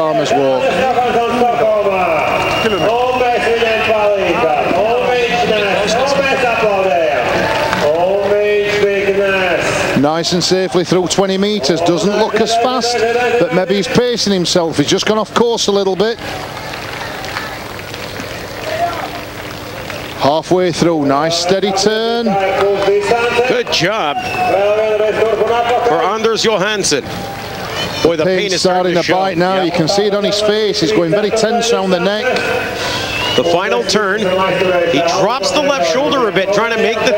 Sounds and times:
Speech: 0:00.0 - 0:16.2, 0:20.2 - 0:27.0, 0:27.8 - 0:32.8, 0:33.4 - 0:37.1.

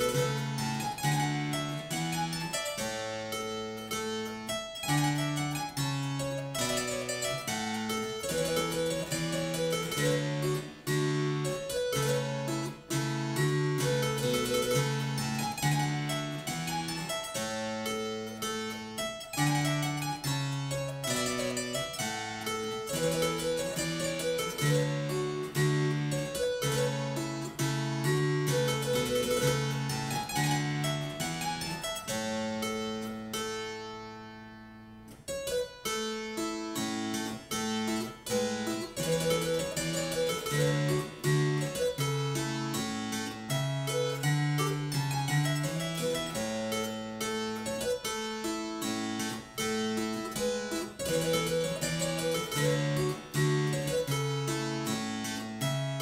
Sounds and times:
Harpsichord: 0:00.0 - 0:56.0.

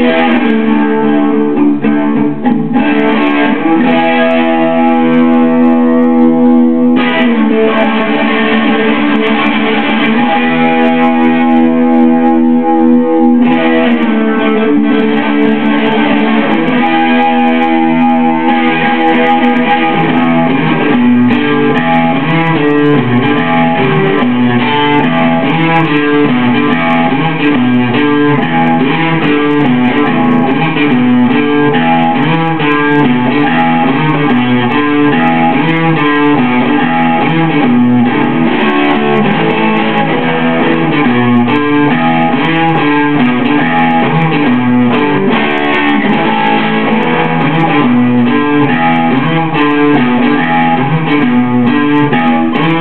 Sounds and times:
Electric guitar: 0:00.0 - 0:52.8.

